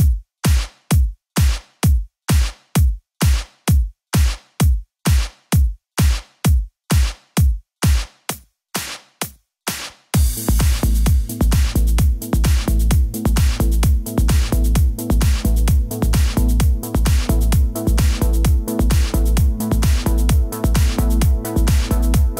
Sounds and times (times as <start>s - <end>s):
House music: 0.0s - 22.3s.